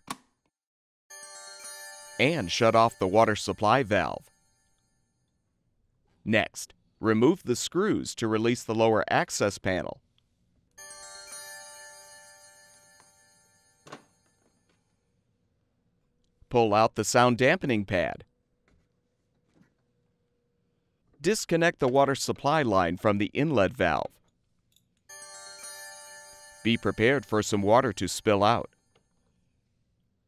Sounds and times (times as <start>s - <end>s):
Music: 1.1s - 4.9s, 10.8s - 13.9s, 25.1s - 28.3s
Speech: 2.2s - 4.2s, 6.2s - 10.0s, 16.5s - 18.3s, 21.2s - 24.2s, 26.7s - 28.7s.